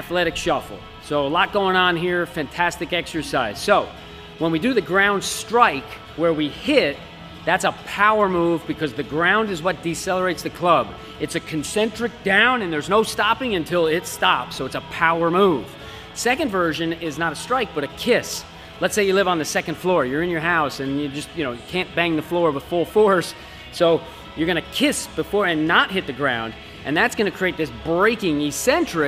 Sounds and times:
Music: 0.0 - 29.0
Speech: 0.0 - 29.0.

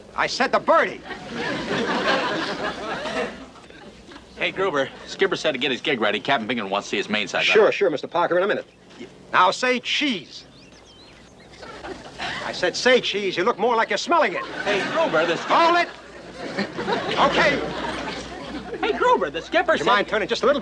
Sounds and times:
Speech: 0.2 - 1.1, 4.4 - 10.5, 12.4 - 16.0, 17.1 - 17.8, 18.8 - 20.6.

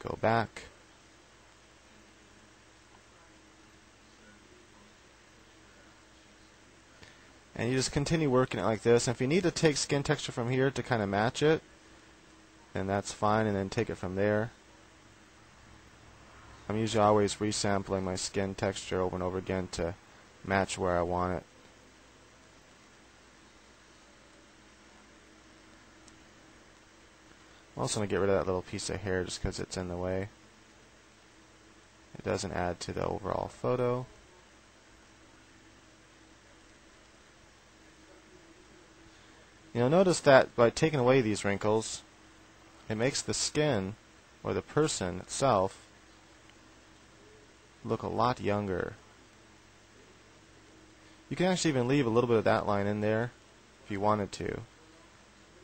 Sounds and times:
Speech: 0.0 - 0.8, 7.6 - 11.6, 12.7 - 14.6, 16.7 - 21.5, 27.8 - 30.4, 32.1 - 34.5, 39.7 - 42.1, 42.9 - 45.9, 47.8 - 49.0, 51.3 - 55.6.

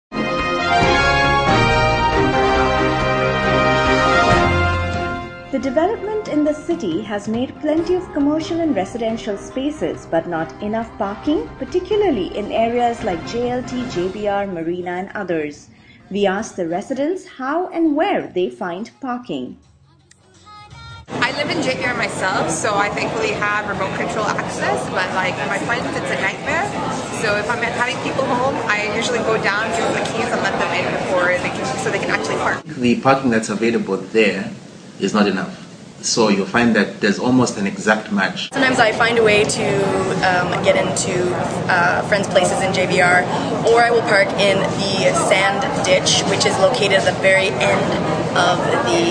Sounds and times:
Theme music: 0.1 - 15.0
Speech: 5.6 - 19.6, 21.2 - 49.1.

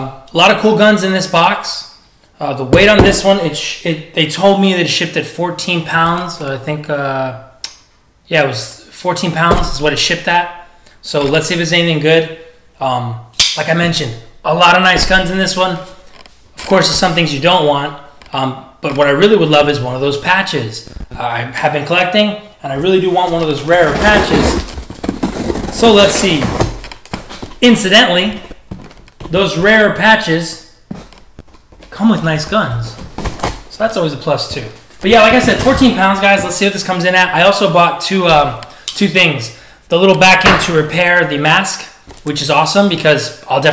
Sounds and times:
Speech: 0.0 - 7.5, 8.3 - 16.0, 16.6 - 24.6, 25.8 - 26.7, 27.6 - 28.5, 29.3 - 30.7, 31.9 - 33.1, 33.7 - 43.7.

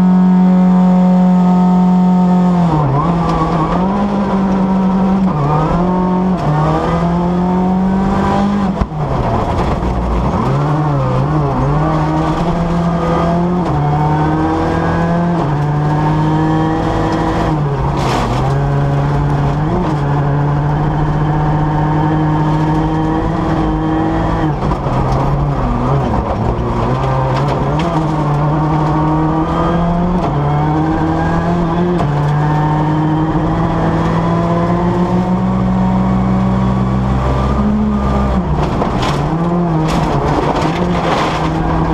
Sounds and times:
Accelerating, revving, vroom: 0.0 - 41.9
Car: 0.0 - 41.9
Medium engine (mid frequency): 0.0 - 41.9.

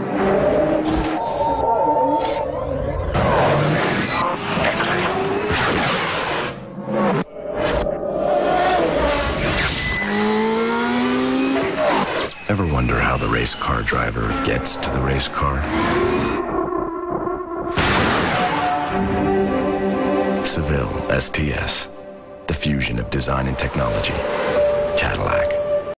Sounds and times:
Speech: 12.5 - 15.7, 20.4 - 21.9, 22.5 - 24.2, 25.0 - 25.6
Music: 18.6 - 25.9.

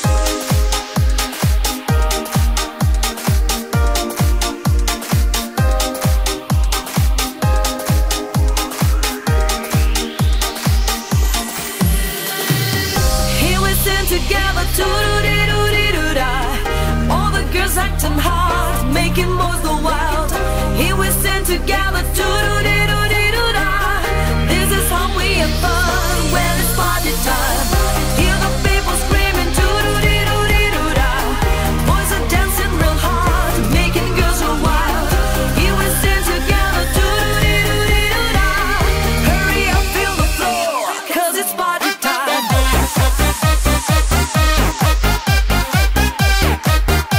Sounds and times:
Music: 0.0 - 47.1.

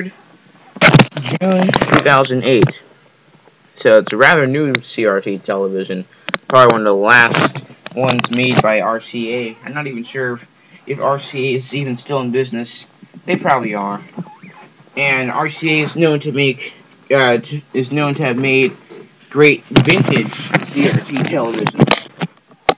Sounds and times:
Speech: 1.2 - 2.9, 3.8 - 14.1, 15.0 - 21.8.

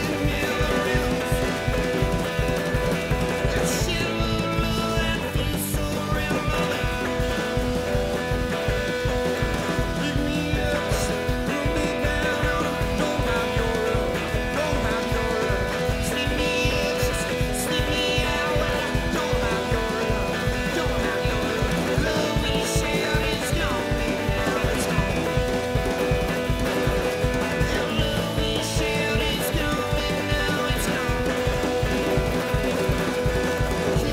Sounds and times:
Music: 0.0 - 34.1.

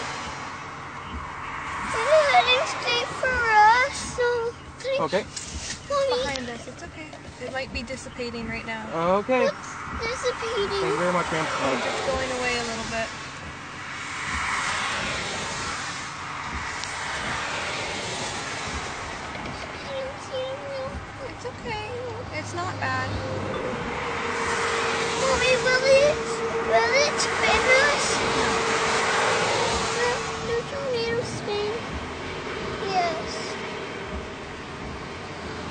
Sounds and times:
Outside, rural or natural: 0.0 - 35.7
Vehicle: 0.0 - 35.7
Child speech, kid speaking: 1.9 - 8.7, 9.3 - 13.1, 19.7 - 23.6, 25.2 - 28.8, 29.9 - 31.9, 32.8 - 33.6.

